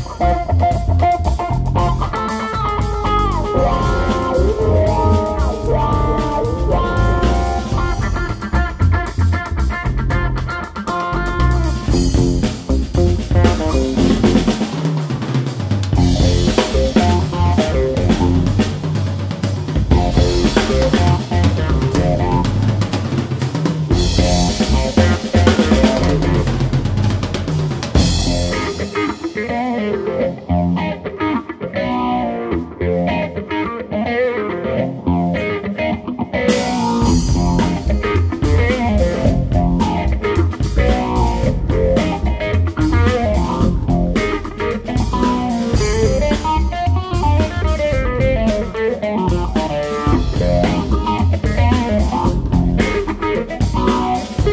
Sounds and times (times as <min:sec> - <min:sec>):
Drum roll: 0:00.0 - 0:30.2, 0:36.5 - 0:54.5
Drum kit: 0:00.0 - 0:54.5
Jazz: 0:00.0 - 0:54.5.